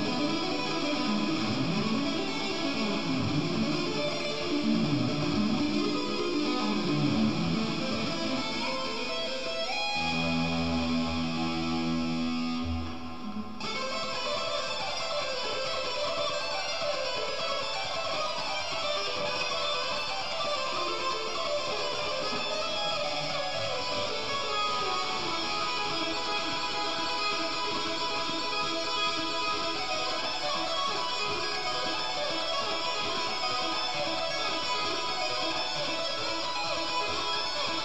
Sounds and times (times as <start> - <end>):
Strum: 10.0 - 13.8.